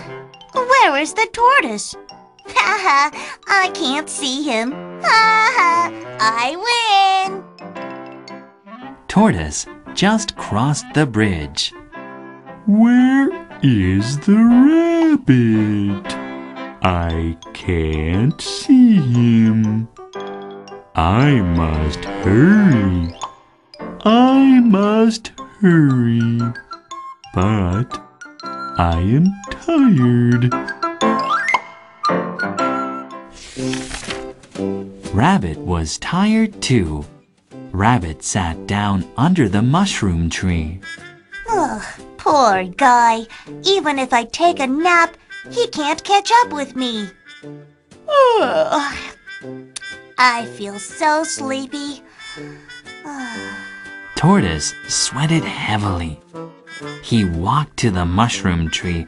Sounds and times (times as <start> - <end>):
Music for children: 0.0 - 59.0
Speech: 9.1 - 11.8, 12.7 - 16.2, 16.8 - 19.9, 21.0 - 23.2, 24.0 - 26.6, 27.4 - 28.0, 28.8 - 30.6, 35.1 - 37.1, 37.7 - 40.8, 54.2 - 56.2, 57.0 - 59.0.